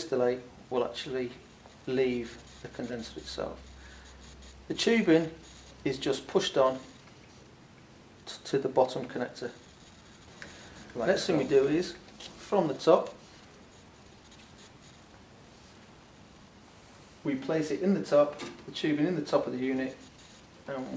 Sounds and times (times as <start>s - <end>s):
Speech: 0.0s - 3.6s, 4.7s - 6.9s, 8.3s - 9.6s, 11.0s - 13.2s, 17.2s - 20.0s, 20.7s - 20.9s.